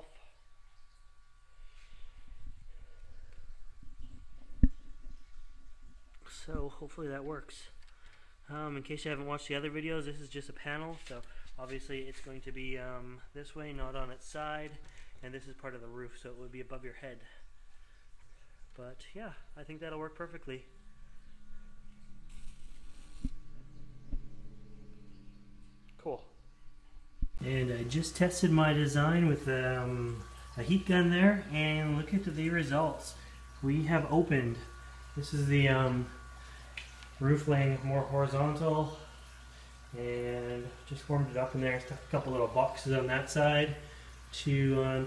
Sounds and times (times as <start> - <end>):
Speech: 6.2 - 7.8, 8.5 - 17.4, 18.8 - 20.7, 26.0 - 26.3, 27.4 - 36.2, 37.2 - 39.1, 39.9 - 45.0.